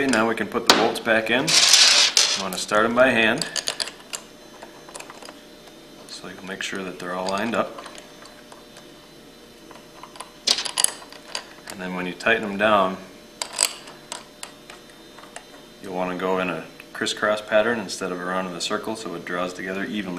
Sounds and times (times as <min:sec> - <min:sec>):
Speech: 0:00.0 - 0:01.5, 0:02.4 - 0:03.5, 0:06.1 - 0:07.8, 0:11.7 - 0:13.1, 0:15.8 - 0:20.1.